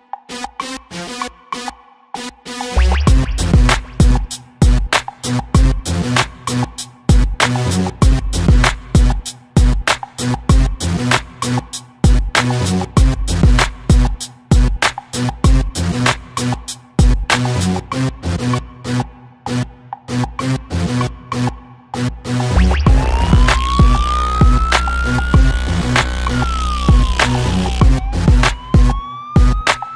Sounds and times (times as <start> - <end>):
Electronic dance music: 0.3 - 17.8, 21.0 - 29.9.